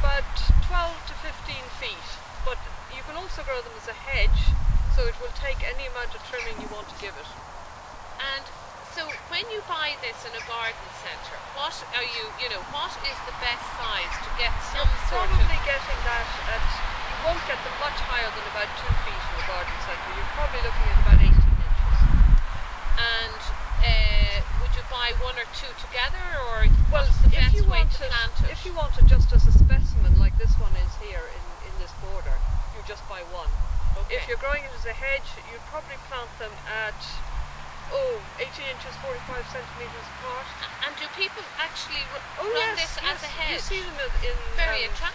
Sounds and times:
Speech: 0.0 - 7.4, 8.2 - 22.1, 23.0 - 37.2, 37.9 - 45.1
Outside, rural or natural: 0.0 - 45.1.

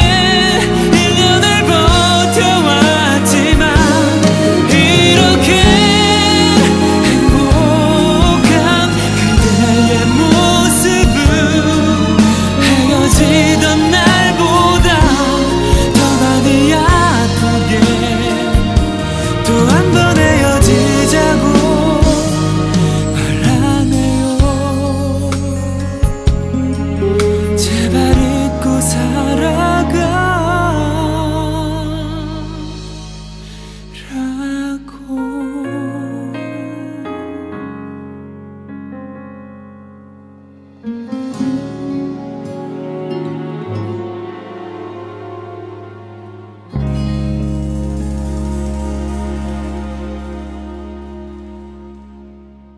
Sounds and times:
Tender music: 0.0 - 52.7.

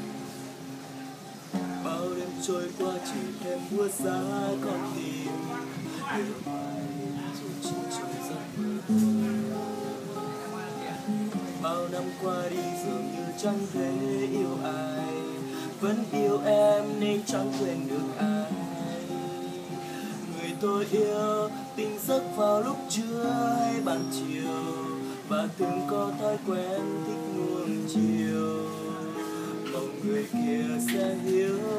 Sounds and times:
Acoustic guitar: 0.0 - 31.7.

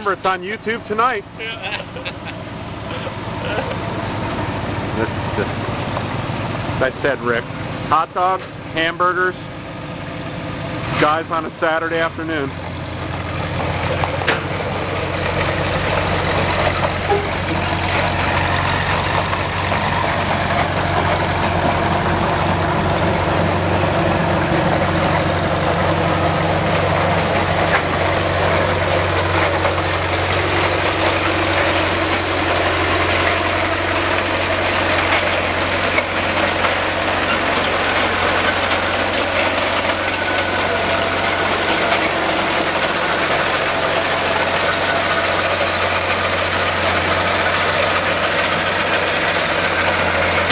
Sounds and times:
Vehicle: 0.0 - 50.5.

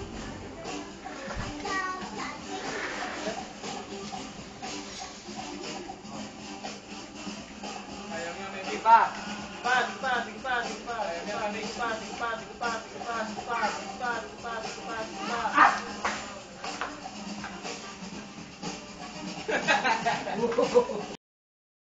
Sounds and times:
Music: 0.0 - 21.2.

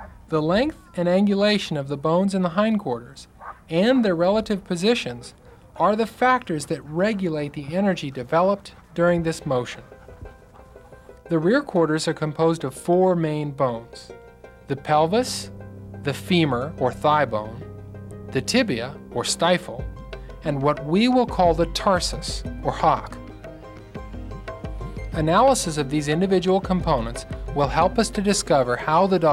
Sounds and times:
Speech: 0.3 - 9.9, 11.3 - 14.1, 14.7 - 15.5, 16.1 - 17.6, 18.4 - 23.2, 25.2 - 29.3
Music: 8.6 - 29.3.

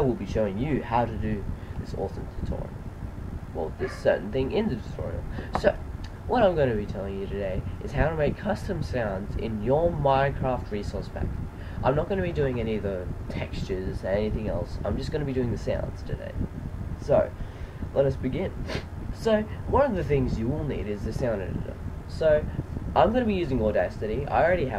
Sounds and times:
Speech: 0.0 - 2.7, 3.6 - 16.4, 17.0 - 24.7.

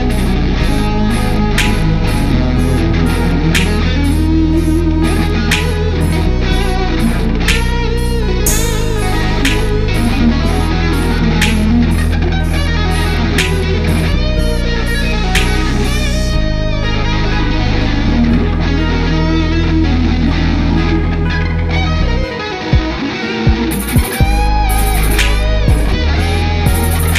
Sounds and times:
Bass guitar: 0.0 - 27.1.

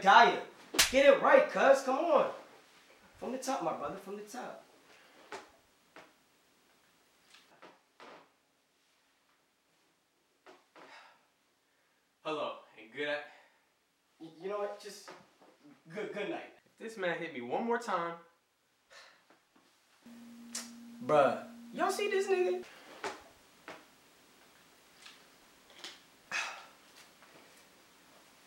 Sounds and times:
Speech: 0.0 - 2.4, 3.2 - 4.6, 12.2 - 13.3, 14.2 - 18.3, 21.0 - 22.6.

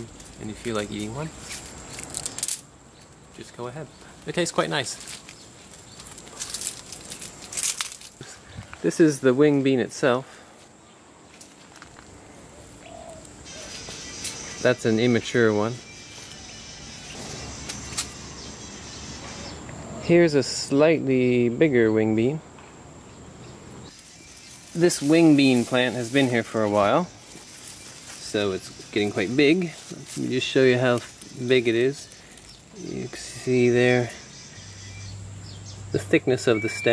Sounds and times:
Speech: 0.0 - 1.4, 3.4 - 5.1, 8.8 - 10.3, 14.6 - 15.8, 20.0 - 22.4, 24.8 - 27.1, 28.2 - 32.1, 32.8 - 34.2, 35.9 - 36.9
Music: 13.8 - 17.8.

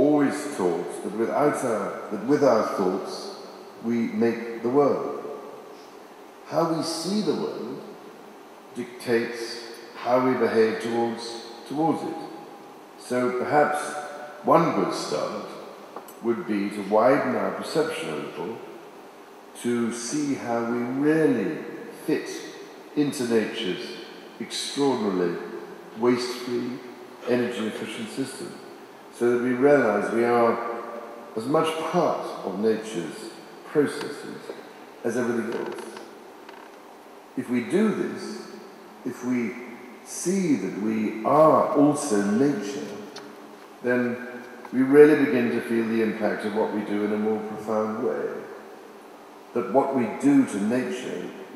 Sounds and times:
Male speech, man speaking: 0.0 - 5.2, 6.5 - 7.8, 8.8 - 12.3, 13.0 - 15.6, 16.2 - 18.6, 19.6 - 28.6, 29.2 - 30.8, 31.4 - 36.0, 37.4 - 38.4, 39.1 - 43.1, 43.8 - 48.5, 49.6 - 51.5.

